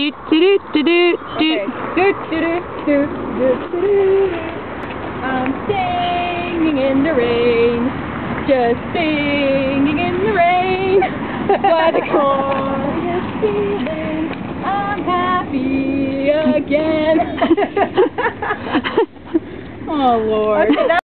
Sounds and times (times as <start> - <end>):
Female singing: 0.0 - 4.6, 5.2 - 7.9, 8.5 - 17.6
Speech: 19.9 - 21.0.